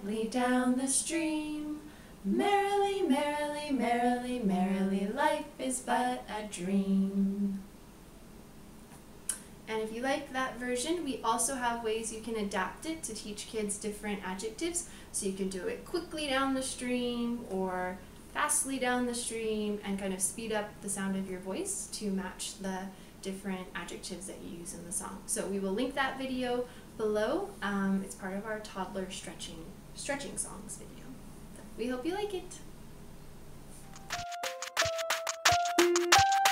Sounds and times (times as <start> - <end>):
Speech: 0.0 - 7.1, 9.7 - 32.7.